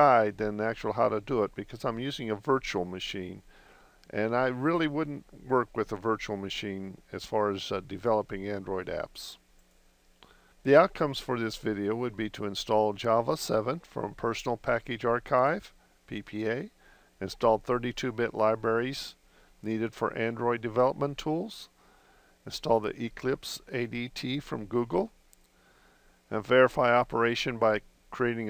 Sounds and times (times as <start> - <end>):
Speech: 0.0 - 3.4, 4.1 - 9.4, 10.6 - 21.8, 22.4 - 25.2, 26.3 - 28.4.